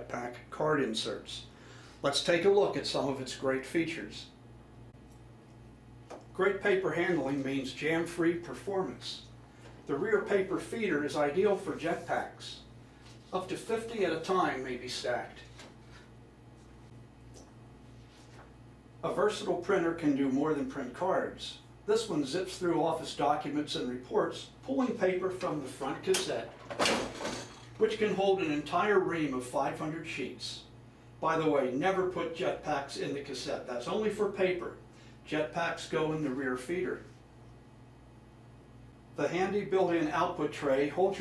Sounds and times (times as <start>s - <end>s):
Speech: 0.0s - 4.4s, 6.3s - 15.6s, 19.0s - 26.6s, 27.8s - 37.2s, 39.2s - 41.2s.